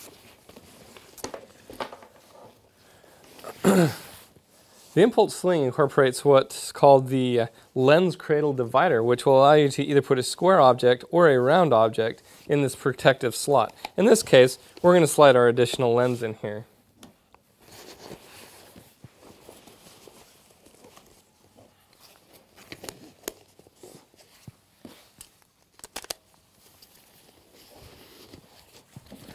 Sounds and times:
Speech: 0:05.0 - 0:16.7.

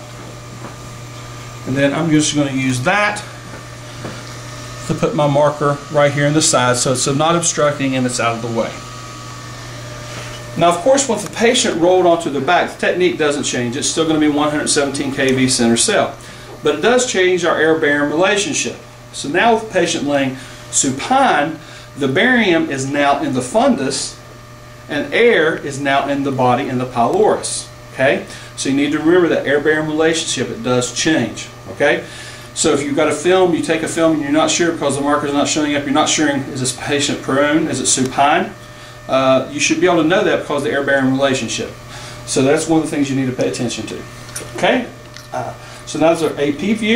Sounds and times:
Speech: 0:01.7 - 0:03.3, 0:04.8 - 0:08.8, 0:10.6 - 0:24.2, 0:24.9 - 0:46.9.

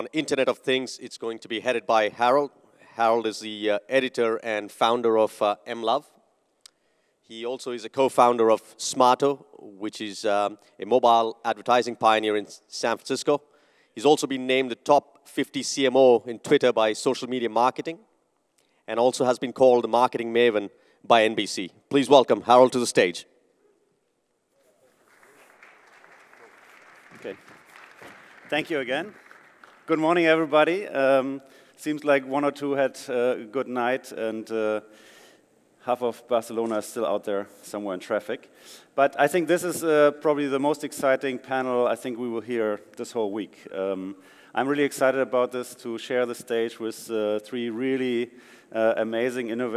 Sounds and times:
Speech: 0:00.0 - 0:06.2, 0:07.3 - 0:18.0, 0:18.9 - 0:23.3, 0:27.2 - 0:27.4, 0:28.5 - 0:29.2, 0:29.9 - 0:34.9, 0:35.8 - 0:49.7.

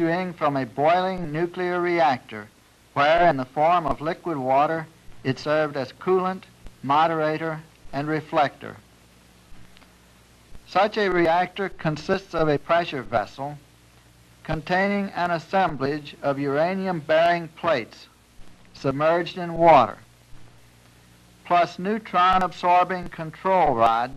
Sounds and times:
Speech: 0:00.0 - 0:08.8, 0:10.7 - 0:13.6, 0:14.5 - 0:18.1, 0:18.8 - 0:20.0, 0:21.5 - 0:24.1.

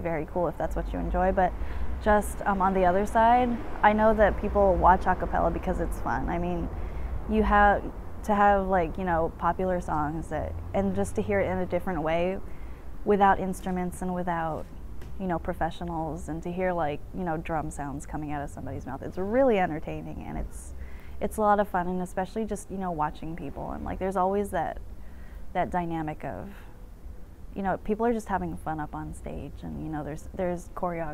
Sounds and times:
Speech: 0:00.0 - 0:06.7, 0:07.3 - 0:12.4, 0:13.1 - 0:24.8, 0:25.6 - 0:26.7, 0:27.6 - 0:31.1.

